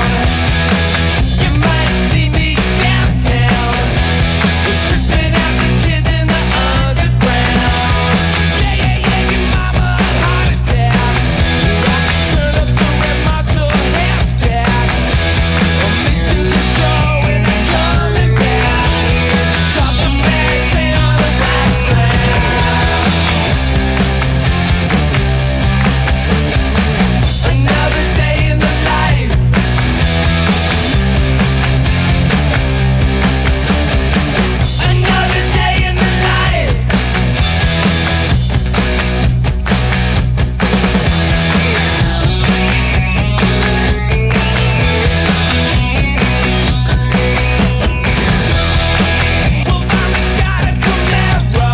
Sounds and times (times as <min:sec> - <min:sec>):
Disco: 0:00.0 - 0:26.3
Grunge: 0:00.0 - 0:51.7.